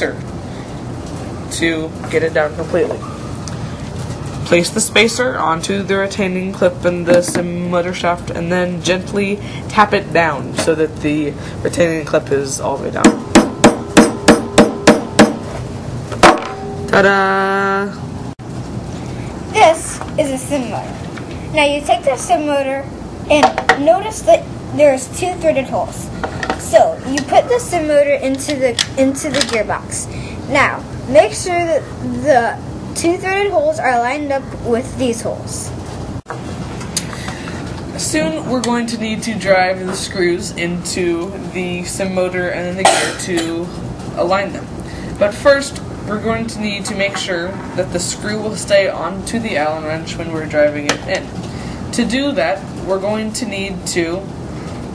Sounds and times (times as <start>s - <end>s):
Child speech, kid speaking: 19.5s - 35.8s, 38.0s - 38.8s.